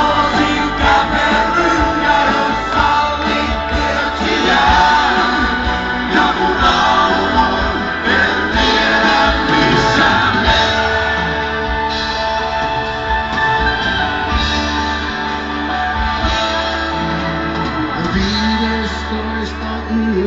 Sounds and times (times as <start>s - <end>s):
Music: 0.0s - 20.2s.